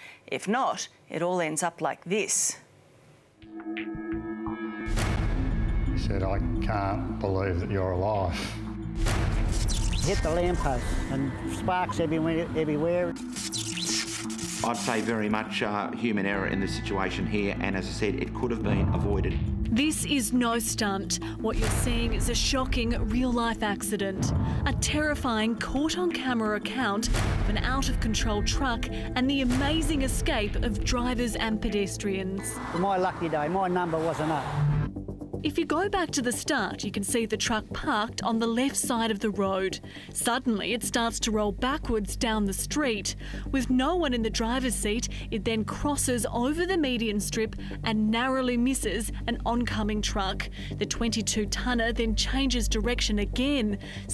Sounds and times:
Music: 3.4 - 54.1.

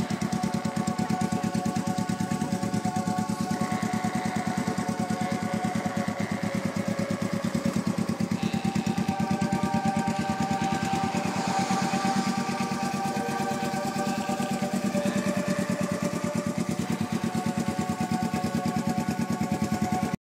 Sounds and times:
Music: 0.0 - 20.2.

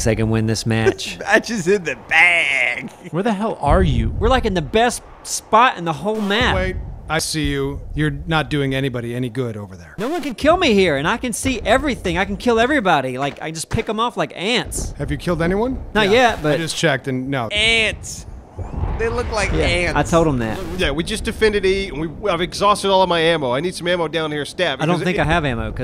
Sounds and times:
Speech: 0.0 - 18.2, 19.0 - 25.8.

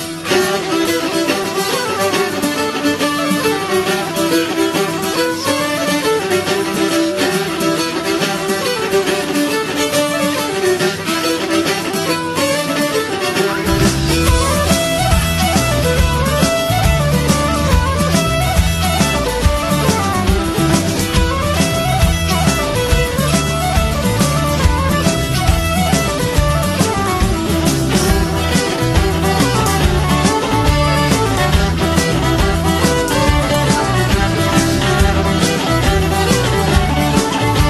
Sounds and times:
Music: 0.0 - 37.7.

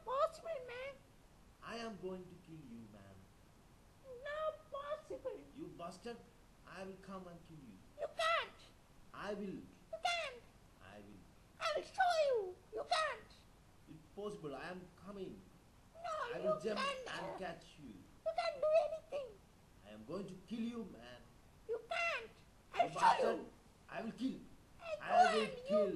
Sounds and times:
Speech: 0.0 - 1.0, 1.6 - 3.2, 4.1 - 25.9.

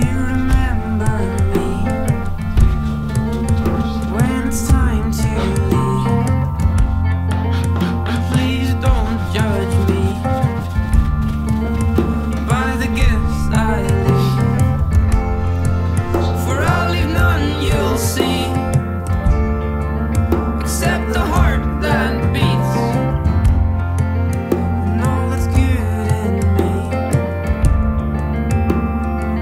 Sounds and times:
Acoustic guitar: 0.0 - 29.4.

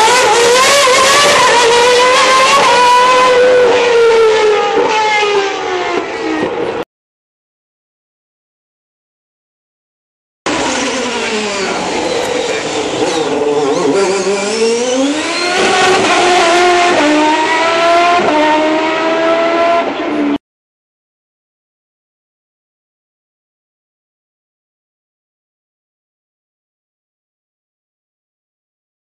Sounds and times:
Car: 0.0 - 6.8, 10.5 - 20.4.

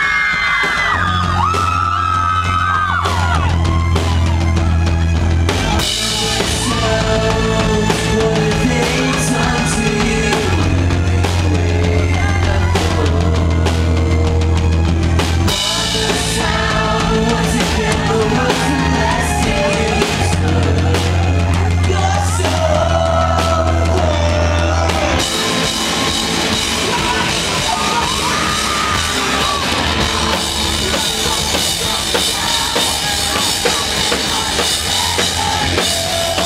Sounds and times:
Music: 0.0 - 36.4.

